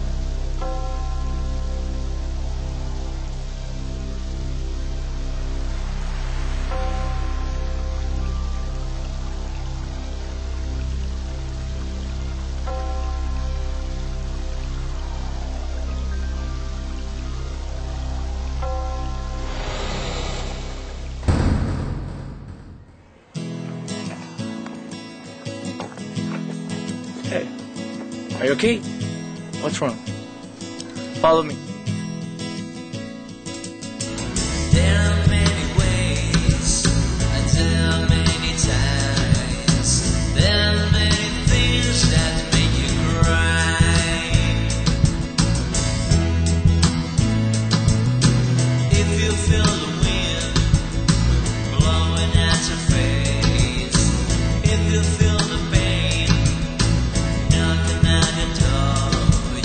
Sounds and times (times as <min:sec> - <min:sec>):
Music: 0:00.0 - 0:21.8, 0:23.2 - 0:59.6.